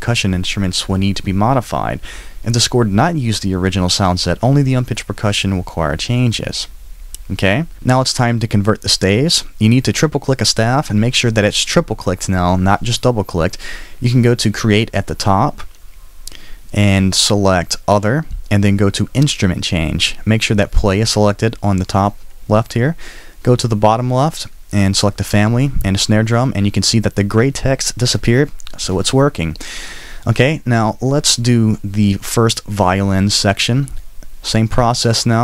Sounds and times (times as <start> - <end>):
Speech: 0.0 - 15.7, 16.7 - 29.6, 30.2 - 35.4.